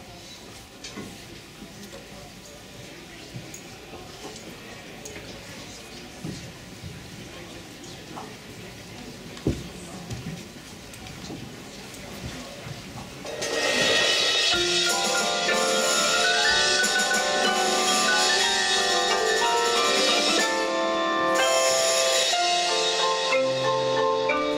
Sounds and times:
Marimba, xylophone: 0:13.3 - 0:24.5
Glockenspiel: 0:14.4 - 0:24.5.

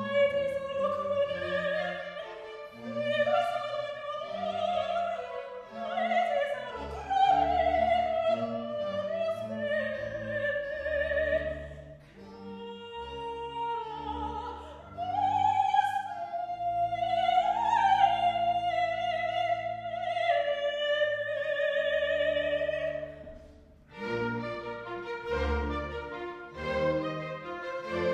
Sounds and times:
Opera: 0:00.0 - 0:28.1.

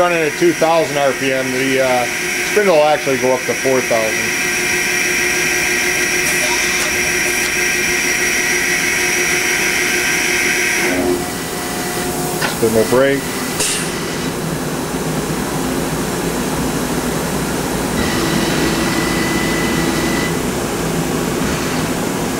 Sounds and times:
Speech: 0:00.0 - 0:04.3, 0:12.6 - 0:13.3
Power tool: 0:00.6 - 0:14.3, 0:18.0 - 0:20.4.

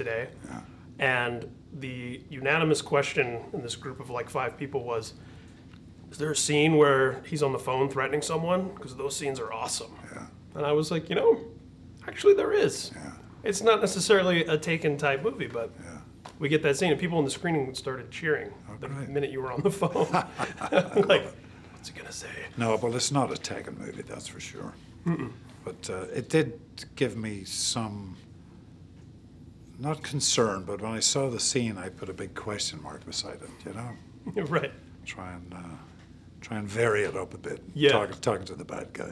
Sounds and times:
Speech: 0:00.0 - 0:05.2, 0:06.1 - 0:20.0, 0:20.9 - 0:28.3, 0:29.8 - 0:39.1.

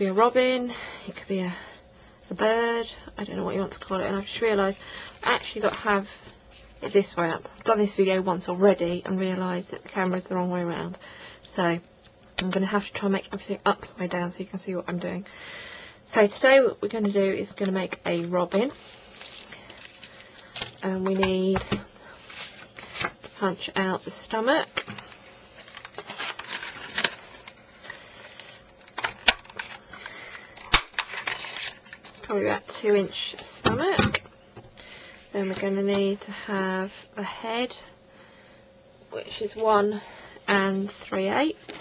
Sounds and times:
Speech: 0:00.0 - 0:01.7, 0:02.3 - 0:06.2, 0:06.8 - 0:15.3, 0:16.1 - 0:18.8, 0:20.8 - 0:21.8, 0:23.4 - 0:24.7, 0:32.3 - 0:34.1, 0:35.3 - 0:37.9, 0:39.1 - 0:41.8.

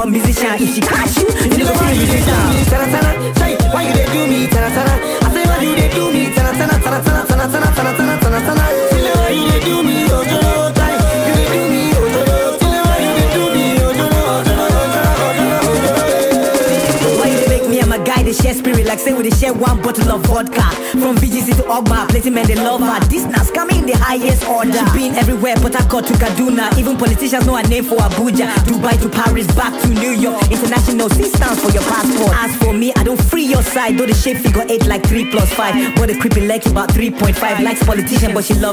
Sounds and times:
Hip hop music: 0:00.0 - 0:38.7
Music of Africa: 0:00.0 - 0:38.7
Singing: 0:00.0 - 0:38.7.

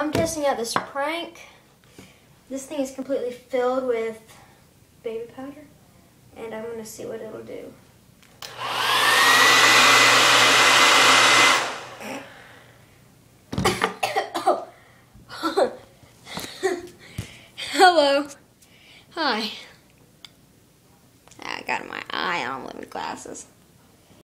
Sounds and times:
Speech: 0:00.0 - 0:01.6, 0:02.5 - 0:04.3, 0:05.0 - 0:07.8, 0:17.6 - 0:18.4, 0:19.2 - 0:19.8, 0:21.4 - 0:23.5.

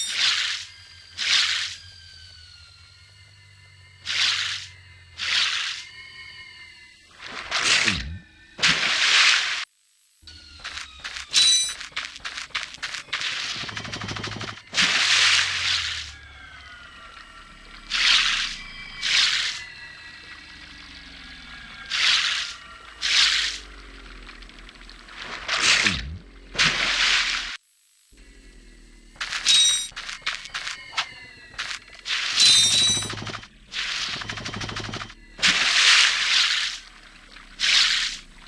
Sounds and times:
Mechanisms: 0:00.0 - 0:38.4.

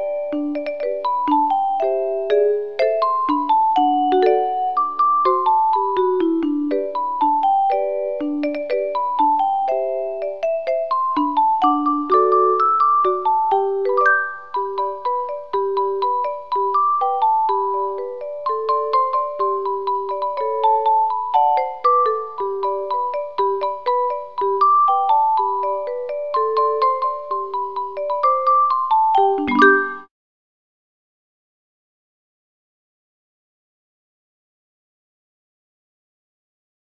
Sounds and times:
Music: 0:00.0 - 0:30.1.

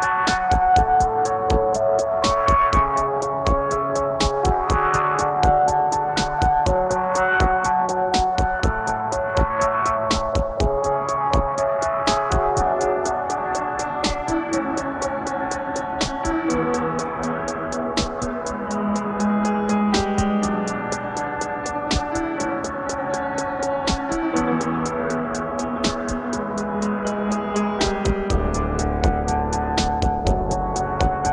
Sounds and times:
Ambient music: 0:00.0 - 0:31.3.

